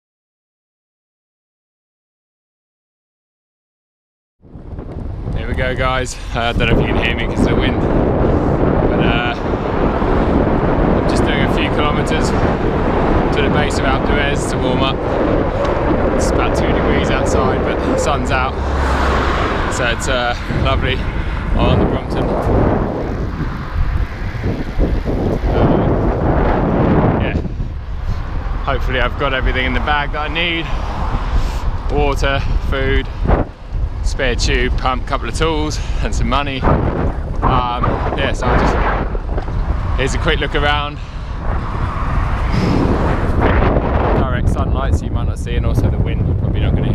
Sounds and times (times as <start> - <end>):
Bicycle: 4.4 - 44.2
Speech: 5.4 - 7.8, 8.9 - 9.4, 11.1 - 12.4, 13.3 - 15.0, 16.2 - 18.6, 19.7 - 21.0, 21.6 - 22.4, 27.2 - 27.4, 28.7 - 30.7, 31.9 - 33.1, 34.0 - 36.7, 37.4 - 38.8, 40.0 - 41.0, 44.2 - 46.9.